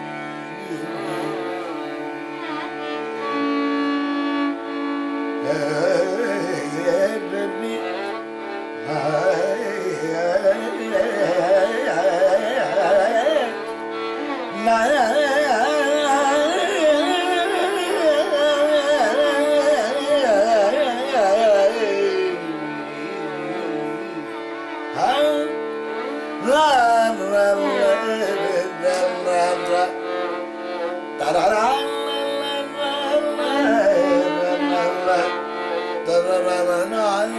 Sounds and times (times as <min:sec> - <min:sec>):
Carnatic music: 0:00.0 - 0:37.3.